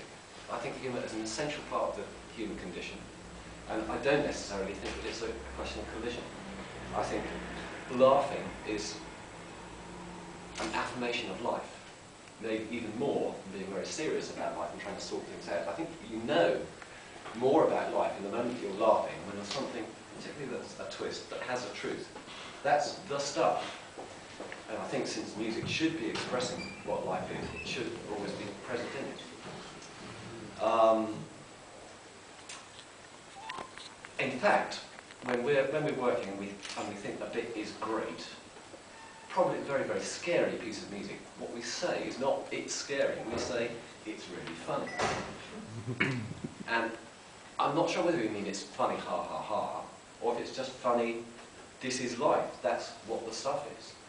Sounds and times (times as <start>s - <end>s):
Speech: 0.0s - 3.0s, 3.7s - 9.1s, 10.6s - 16.8s, 17.4s - 23.8s, 24.7s - 29.4s, 30.6s - 31.3s, 34.2s - 38.5s, 39.3s - 45.2s, 46.7s - 54.0s.